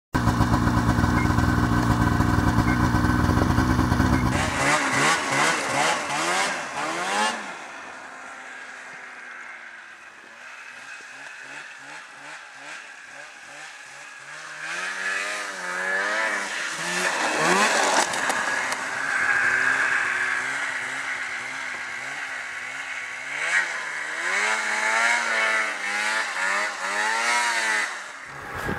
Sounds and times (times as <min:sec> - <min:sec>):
Motorcycle: 0:00.1 - 0:28.7
Race car, auto racing: 0:00.2 - 0:28.7.